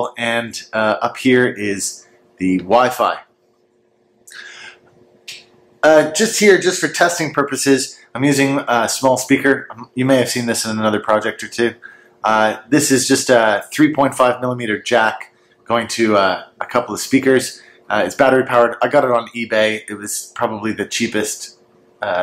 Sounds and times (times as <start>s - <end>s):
Speech: 0.0s - 3.3s, 5.8s - 22.2s.